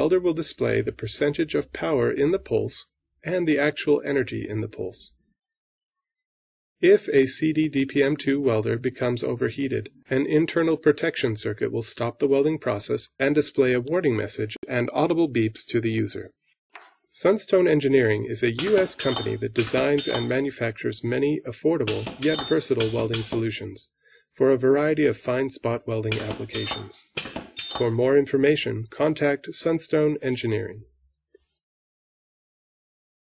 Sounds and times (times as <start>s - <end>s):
Speech: 0.0s - 5.2s, 6.8s - 16.4s, 17.1s - 27.1s, 27.8s - 31.0s.